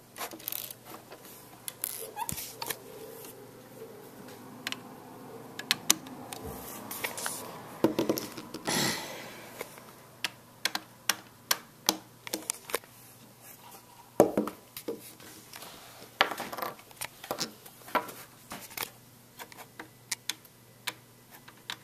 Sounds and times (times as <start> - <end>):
Inside, small room: 0.0 - 21.8.